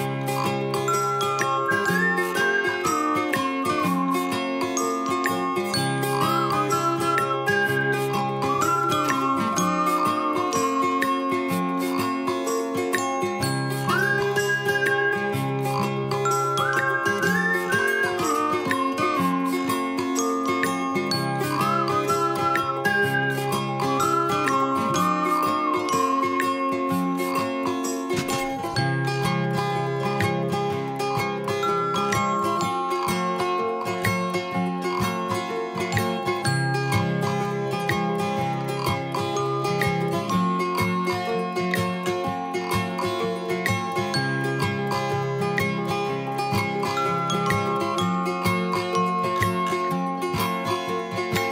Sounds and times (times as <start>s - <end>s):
Music: 0.0s - 51.5s.